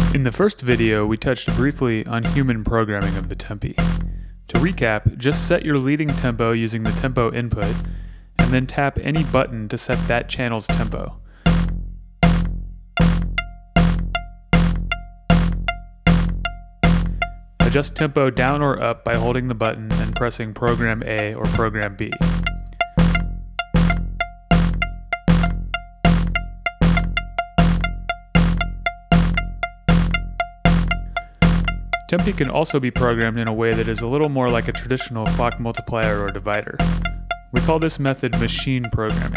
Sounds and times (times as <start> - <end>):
Speech: 0.0 - 3.8, 4.5 - 7.8, 8.4 - 11.2, 17.6 - 22.2, 32.1 - 36.8, 37.5 - 39.3
Music: 0.0 - 39.3.